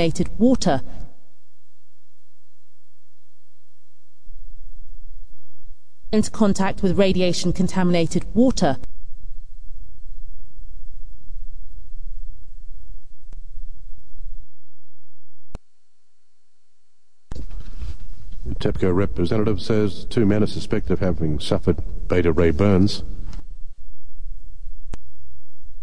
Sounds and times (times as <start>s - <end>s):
Speech: 0.0s - 0.9s, 6.2s - 8.8s, 18.5s - 23.1s.